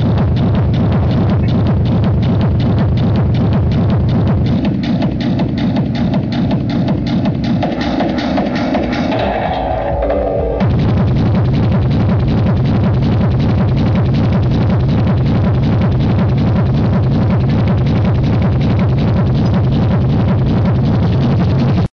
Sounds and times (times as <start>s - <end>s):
Techno: 0.0s - 21.9s.